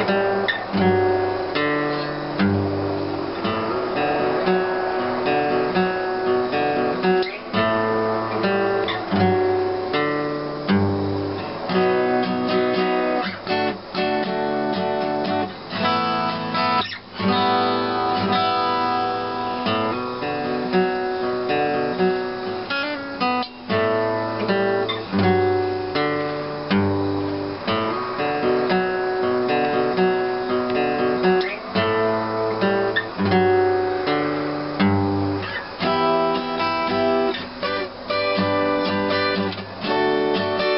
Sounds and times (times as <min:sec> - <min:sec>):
Acoustic guitar: 0:00.0 - 0:40.7
Strum: 0:00.0 - 0:40.7.